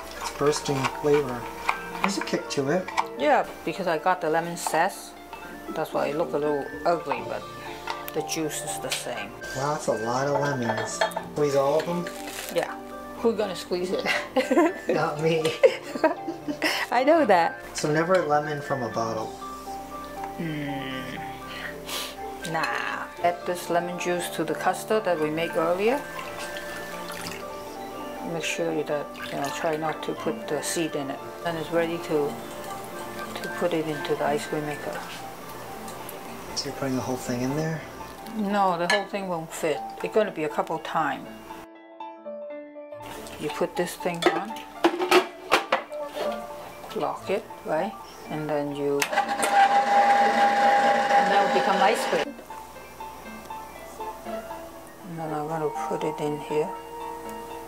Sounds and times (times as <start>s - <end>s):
Music: 0.0s - 57.6s.